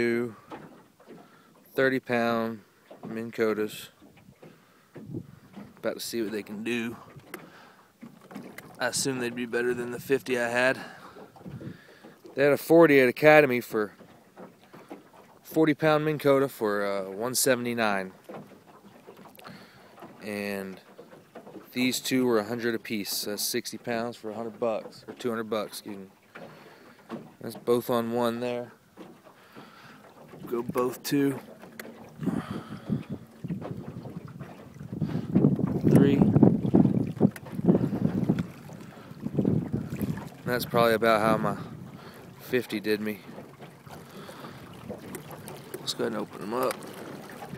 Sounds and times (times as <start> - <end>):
Motorboat, speedboat: 0.0 - 47.5
Speech: 1.8 - 3.9, 5.8 - 7.0, 8.8 - 10.8, 12.4 - 13.9, 15.5 - 18.1, 20.2 - 20.8, 21.8 - 26.1, 27.4 - 28.7, 30.5 - 31.4, 40.5 - 41.6, 42.4 - 43.2, 45.8 - 46.8.